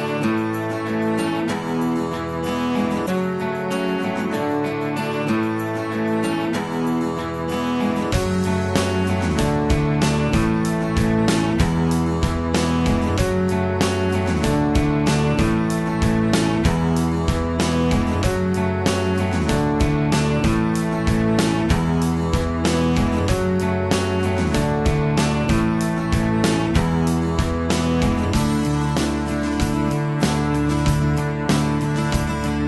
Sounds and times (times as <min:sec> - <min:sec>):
Music: 0:00.0 - 0:32.6.